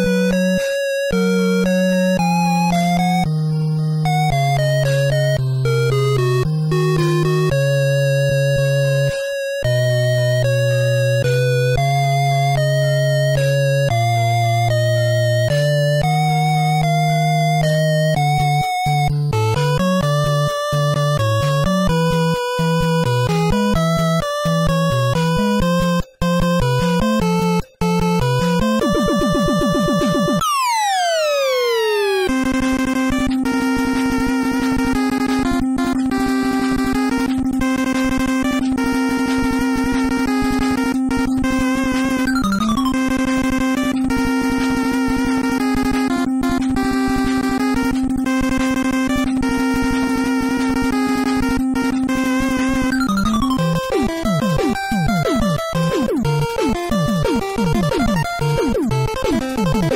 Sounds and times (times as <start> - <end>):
Video game music: 0.0 - 59.9.